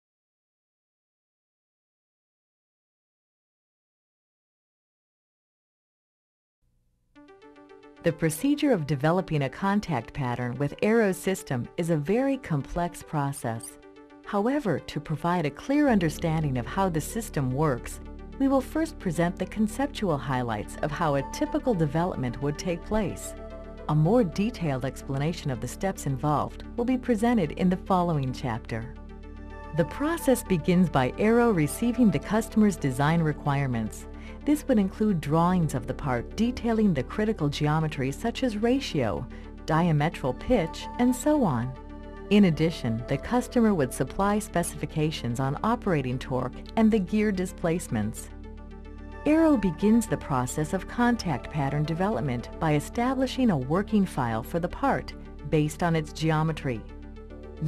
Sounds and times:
Music: 6.7 - 57.6
Speech: 8.1 - 28.9, 29.8 - 48.3, 49.3 - 56.9.

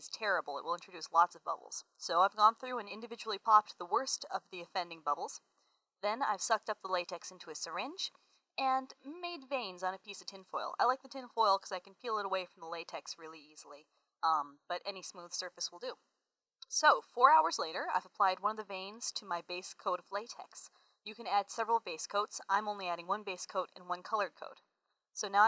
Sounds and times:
Narration, monologue: 0.0 - 25.4.

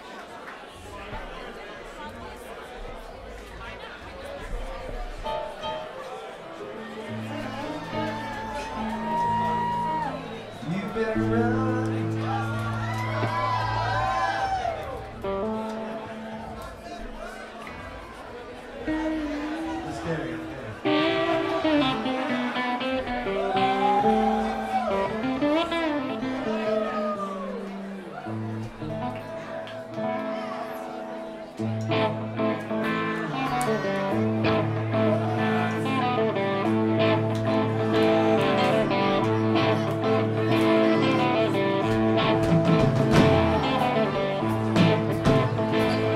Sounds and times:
Music: 3.3 - 46.1.

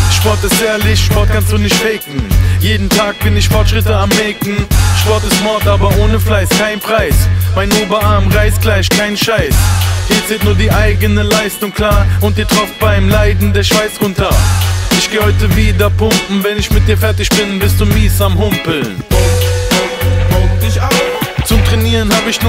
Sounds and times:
Music: 0.0 - 22.4.

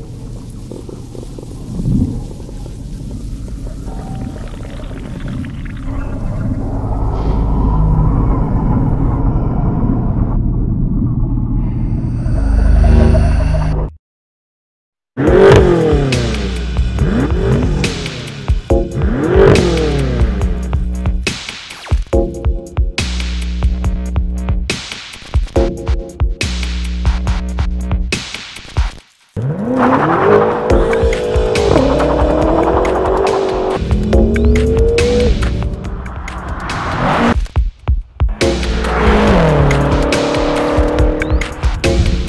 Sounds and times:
Car: 0.0 - 11.1, 15.2 - 21.2, 29.4 - 37.5, 38.3 - 42.2
Accelerating, revving, vroom: 15.2 - 20.6, 29.4 - 37.4, 38.4 - 42.2
Music: 15.2 - 42.2.

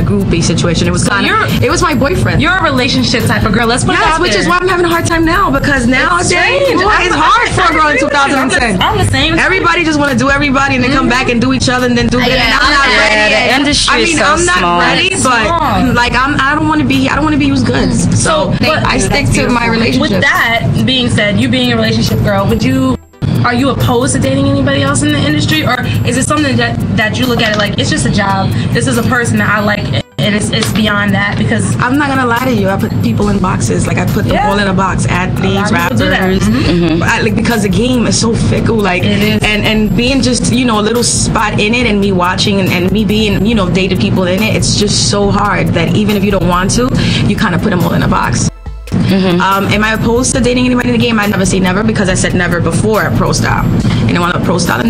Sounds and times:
Speech: 0.0 - 28.2, 29.1 - 48.4, 49.1 - 54.8
Music: 0.0 - 54.8.

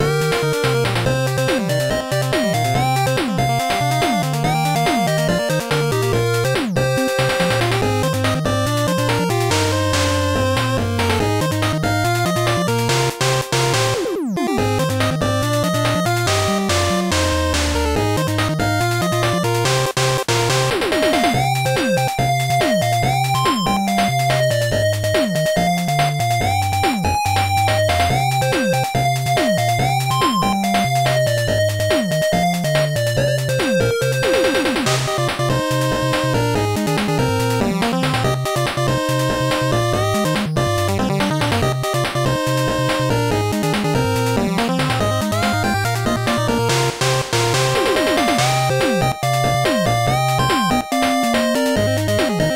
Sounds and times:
Music: 0.0 - 52.5.

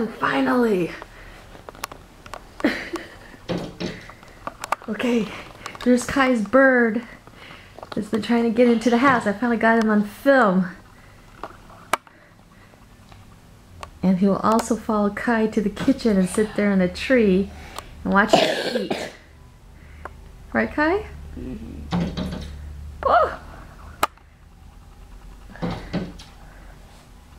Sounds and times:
Cough: 18.3 - 19.2.

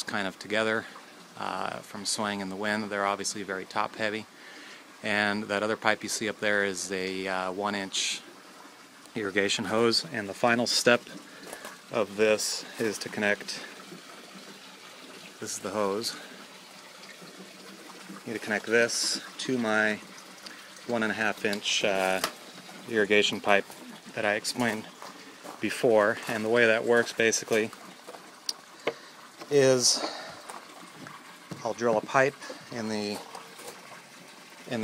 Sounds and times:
Water: 0.0 - 34.8.

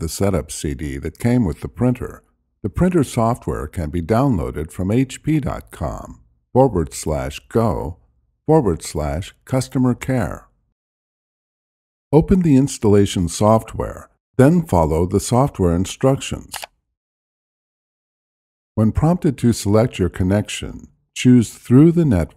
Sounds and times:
Speech: 0.0 - 10.5, 12.1 - 16.7, 18.8 - 22.3.

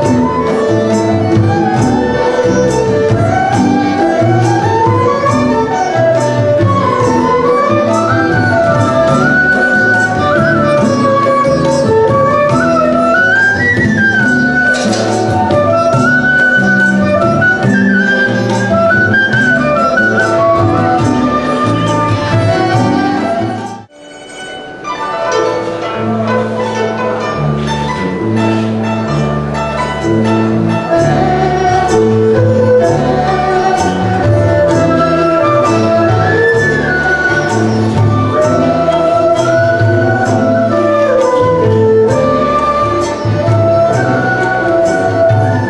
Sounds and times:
Independent music: 0.0 - 45.6.

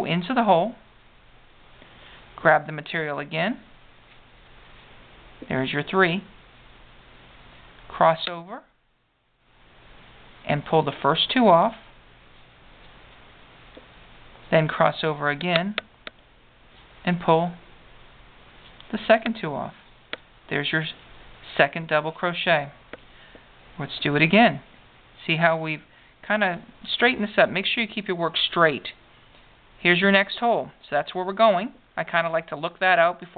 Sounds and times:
Speech: 0.0 - 0.8, 2.4 - 3.7, 5.4 - 6.4, 7.9 - 8.7, 10.4 - 11.9, 14.5 - 15.8, 17.0 - 17.6, 18.9 - 19.8, 20.5 - 22.8, 23.8 - 29.0, 29.8 - 33.3
Inside, small room: 0.0 - 33.3.

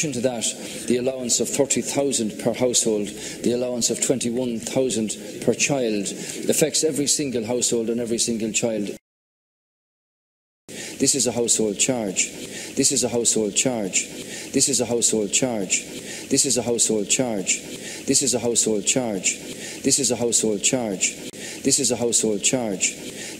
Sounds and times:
Speech: 0.0 - 9.0, 11.0 - 23.1.

